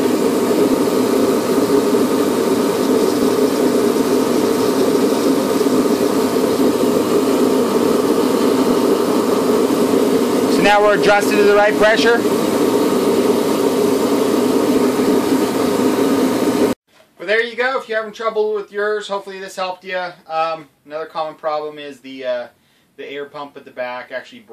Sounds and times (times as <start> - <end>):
Speech: 10.5 - 12.2, 17.2 - 24.5.